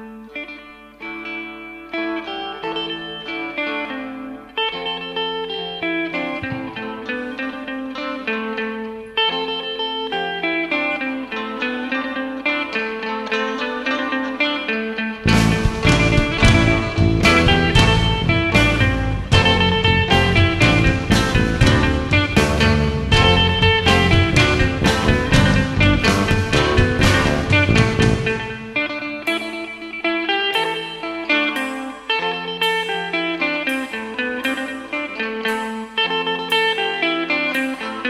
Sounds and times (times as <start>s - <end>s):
Psychedelic rock: 0.0s - 38.0s.